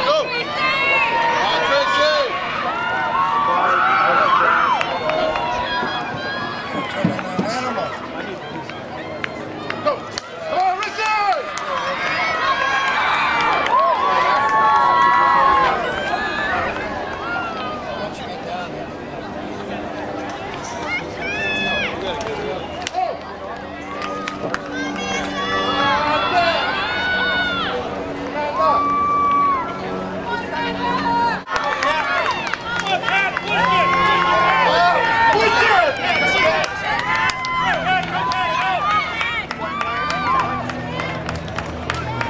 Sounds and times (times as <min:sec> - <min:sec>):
Outside, urban or manmade: 0:00.0 - 0:42.2
Run: 0:00.0 - 0:42.2.